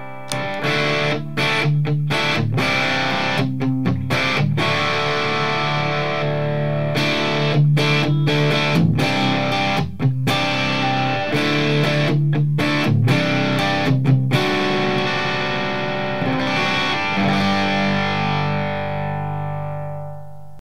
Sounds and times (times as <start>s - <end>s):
Electric guitar: 0.0s - 20.6s.